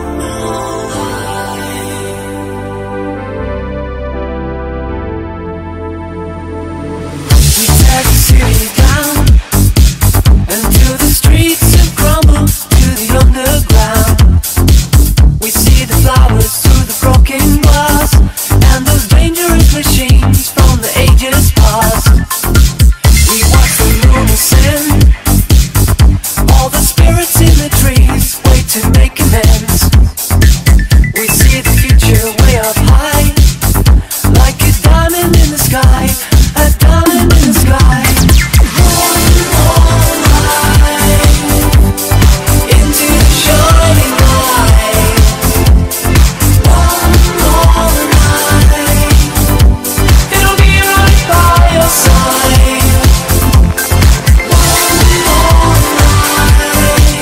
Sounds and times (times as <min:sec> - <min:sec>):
Dance music: 0:00.0 - 0:57.2.